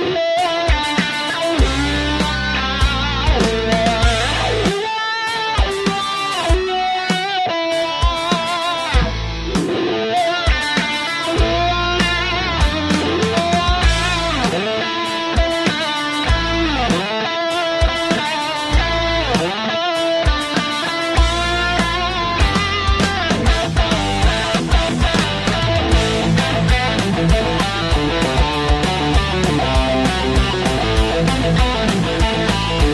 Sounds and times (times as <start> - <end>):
Music: 0.0 - 32.9.